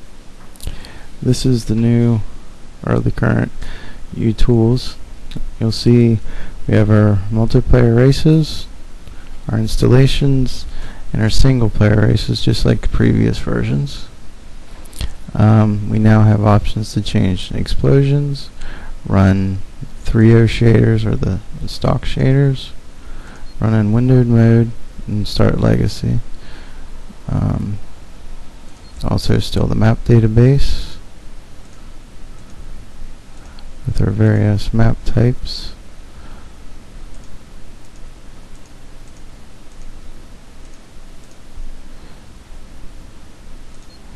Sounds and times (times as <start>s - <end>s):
Speech: 1.2s - 8.7s, 9.5s - 14.2s, 15.3s - 22.8s, 23.6s - 26.3s, 27.2s - 27.8s, 29.0s - 31.0s, 33.8s - 35.8s.